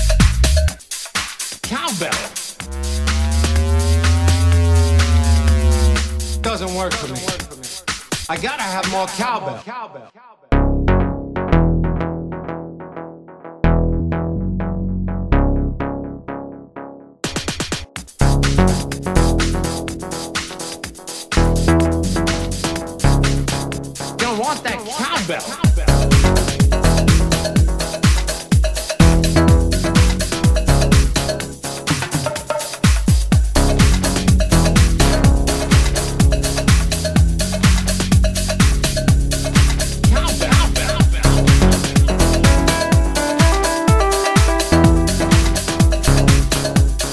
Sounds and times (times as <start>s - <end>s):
Drum machine: 0.0s - 9.4s, 17.2s - 47.1s
Electronic dance music: 0.0s - 9.8s, 17.3s - 47.1s
Speech: 1.7s - 2.4s, 6.4s - 7.7s, 8.3s - 10.2s, 24.2s - 26.0s, 40.1s - 41.5s.